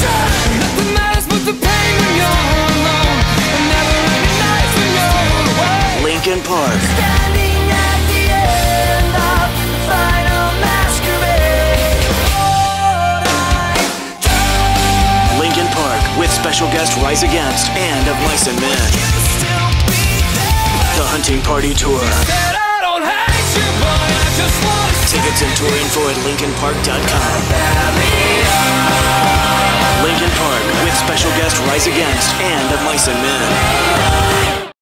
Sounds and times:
Music: 0.0s - 34.8s
Speech: 4.5s - 7.0s, 15.3s - 19.5s, 20.8s - 22.6s, 24.8s - 27.4s, 29.9s - 33.8s.

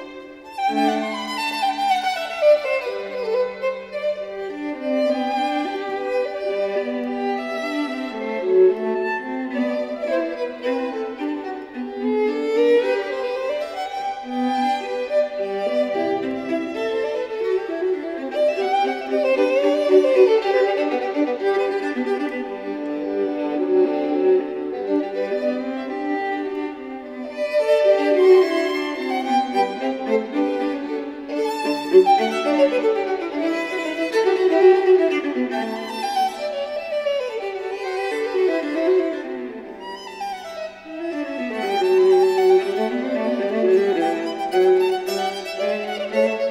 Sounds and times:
Violin, fiddle: 0.0s - 46.5s.

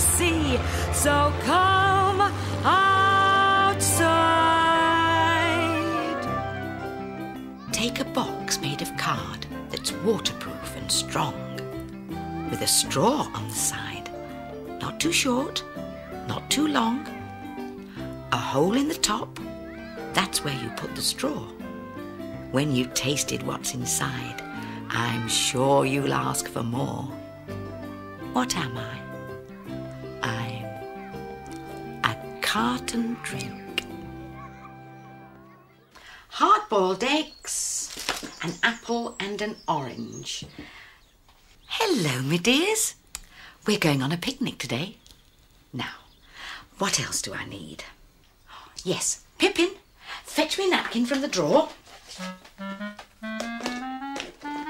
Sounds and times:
Music: 0.0s - 36.3s, 50.8s - 54.7s
Speech: 7.6s - 11.7s, 12.5s - 14.1s, 14.8s - 15.7s, 16.3s - 17.2s, 18.3s - 19.4s, 20.1s - 21.6s, 22.5s - 27.2s, 28.3s - 29.1s, 30.2s - 30.8s, 32.0s - 33.9s, 36.3s - 40.5s, 41.7s - 43.0s, 43.6s - 45.0s, 46.8s - 48.0s, 48.8s - 51.8s.

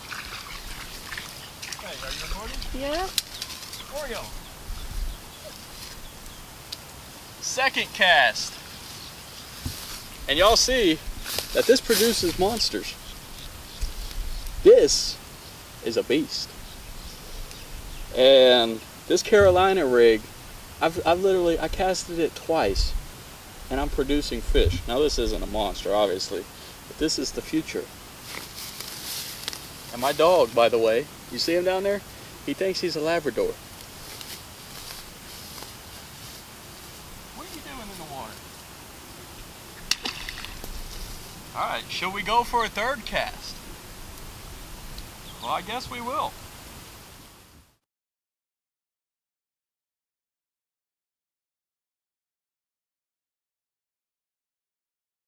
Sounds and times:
Speech: 1.8s - 3.1s, 3.8s - 4.4s, 7.4s - 8.6s, 10.3s - 11.0s, 11.6s - 13.0s, 14.7s - 15.2s, 15.8s - 16.5s, 18.2s - 23.0s, 23.7s - 27.9s, 29.9s - 33.6s, 37.4s - 38.4s, 41.6s - 43.6s, 45.4s - 46.4s.

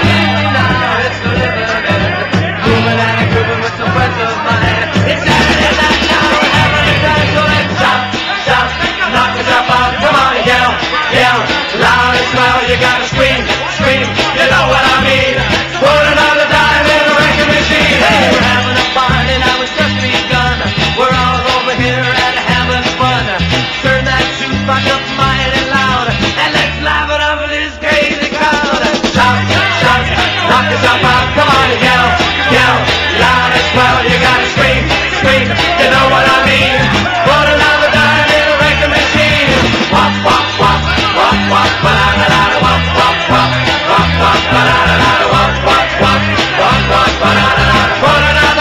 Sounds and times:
Music: 0.0s - 48.6s.

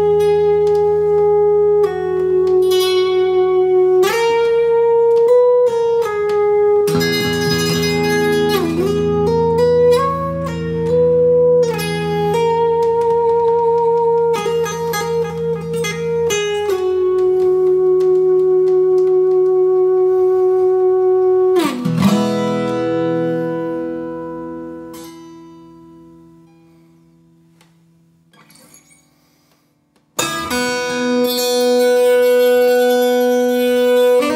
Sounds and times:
Acoustic guitar: 0.0s - 34.3s
Inside, small room: 0.0s - 34.3s.

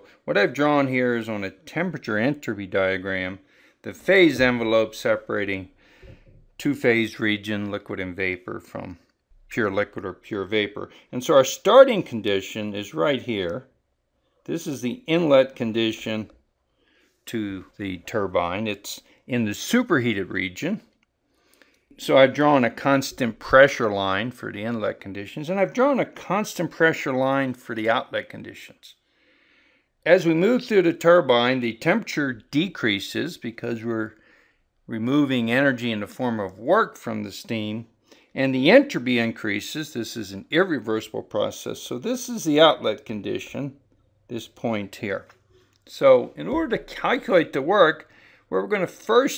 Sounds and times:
Speech: 0.0s - 5.8s, 6.6s - 13.7s, 14.5s - 16.3s, 17.3s - 20.9s, 22.0s - 29.0s, 30.0s - 34.2s, 34.9s - 49.3s.

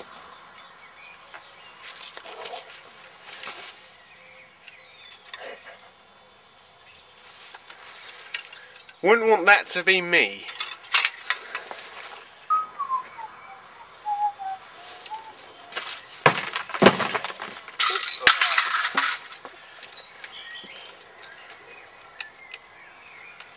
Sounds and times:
Outside, rural or natural: 0.0s - 23.5s
Speech: 9.0s - 10.5s
Whistling: 12.5s - 15.4s.

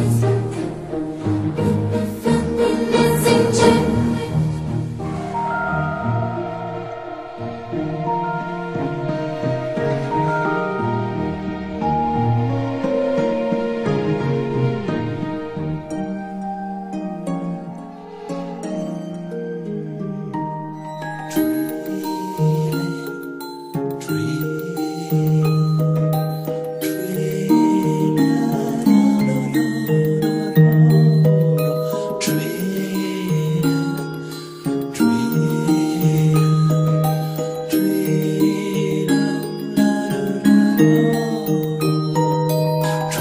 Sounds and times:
Background music: 0.0s - 43.2s
Sad music: 0.0s - 43.2s
Lullaby: 5.1s - 43.2s.

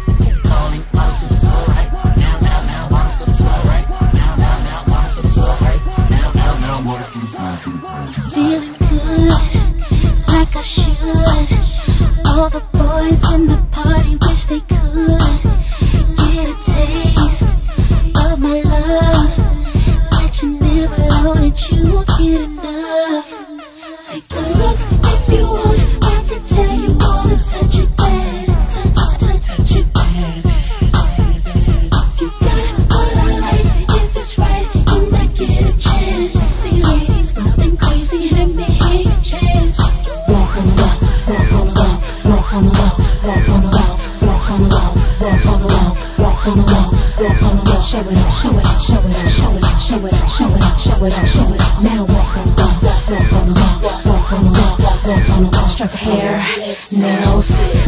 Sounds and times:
Music: 0.0s - 57.8s.

